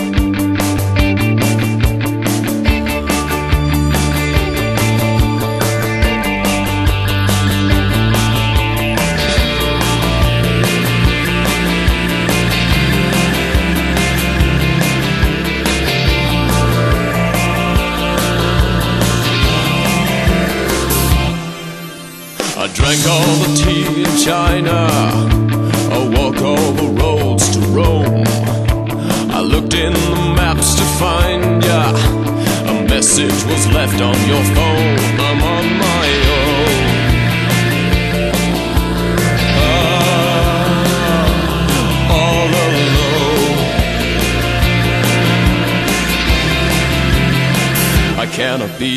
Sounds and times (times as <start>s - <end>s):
Music: 0.0s - 48.9s
Male singing: 22.6s - 28.3s, 29.3s - 37.1s, 39.5s - 43.8s, 48.2s - 48.9s.